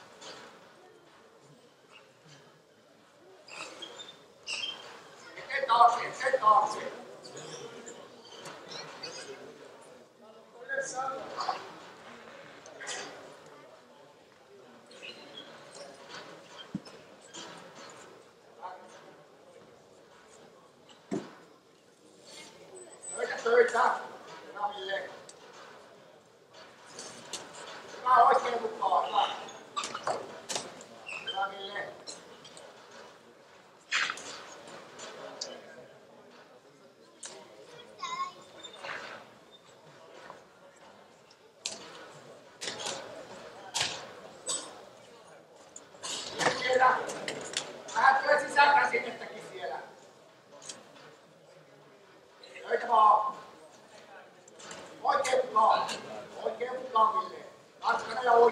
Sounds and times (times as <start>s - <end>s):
Speech: 4.9s - 58.5s.